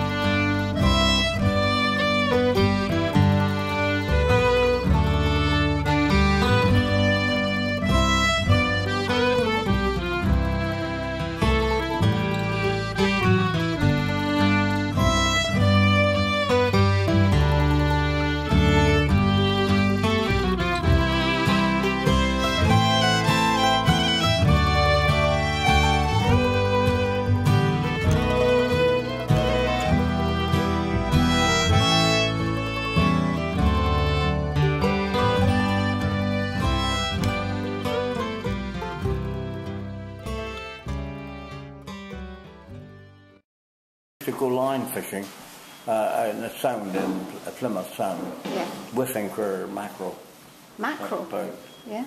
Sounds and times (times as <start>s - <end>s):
Accordion: 0.0s - 43.4s.